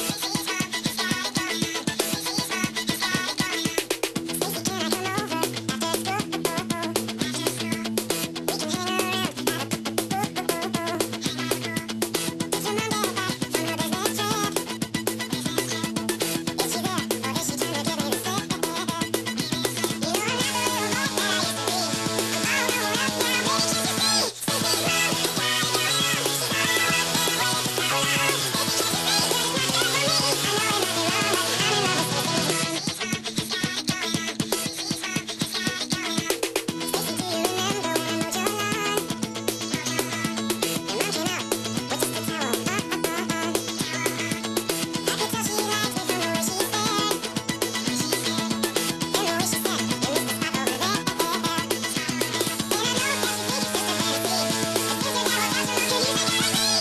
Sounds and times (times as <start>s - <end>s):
Music: 0.0s - 56.8s.